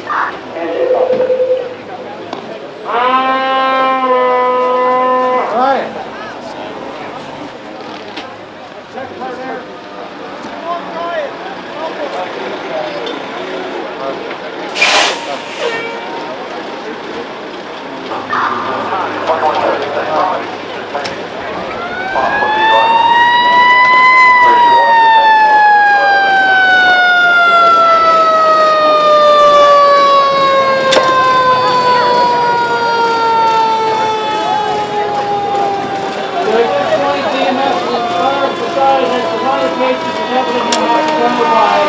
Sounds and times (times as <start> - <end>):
Police car (siren): 0.0 - 2.2, 21.2 - 41.8.